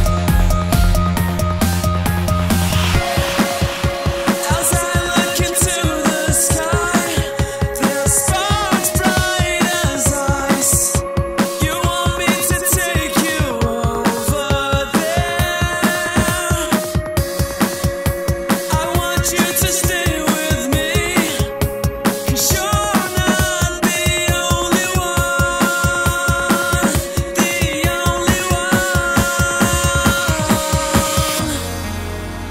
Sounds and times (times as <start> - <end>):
Drum and bass: 0.0 - 32.5.